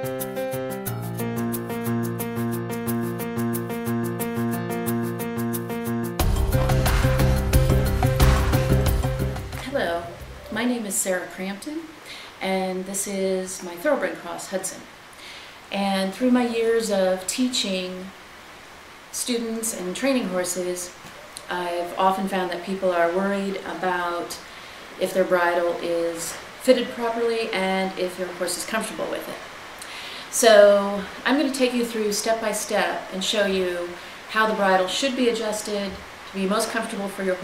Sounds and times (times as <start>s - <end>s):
Speech: 9.6s - 14.9s, 15.7s - 18.1s, 19.2s - 24.4s, 25.0s - 29.4s, 30.4s - 37.4s.